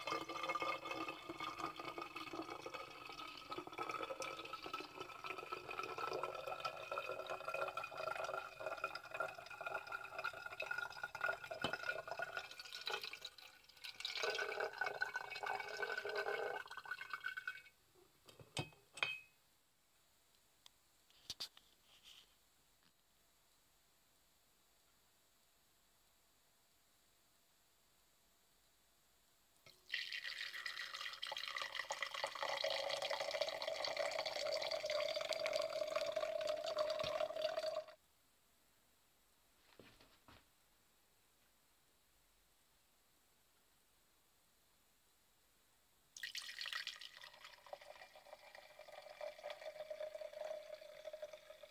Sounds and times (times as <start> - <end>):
Water: 0.0 - 17.8, 29.7 - 38.0, 46.2 - 51.7.